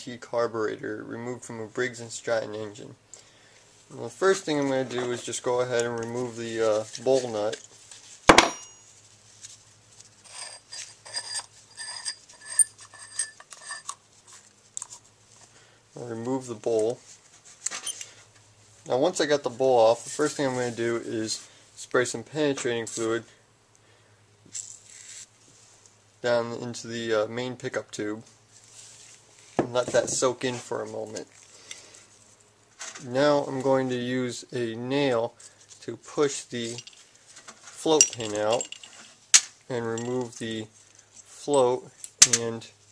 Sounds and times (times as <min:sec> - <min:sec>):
Speech: 0:00.0 - 0:03.0, 0:03.9 - 0:07.6, 0:16.0 - 0:17.0, 0:18.8 - 0:23.4, 0:26.2 - 0:28.3, 0:29.6 - 0:31.3, 0:33.0 - 0:36.9, 0:37.8 - 0:38.7, 0:39.7 - 0:42.8.